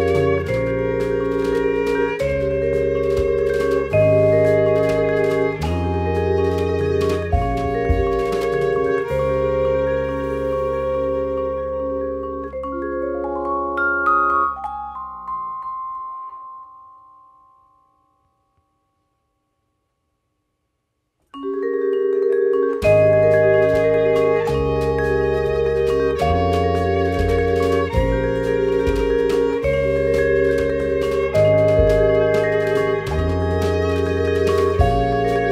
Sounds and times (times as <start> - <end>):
Music: 0.0 - 19.7, 21.2 - 35.5.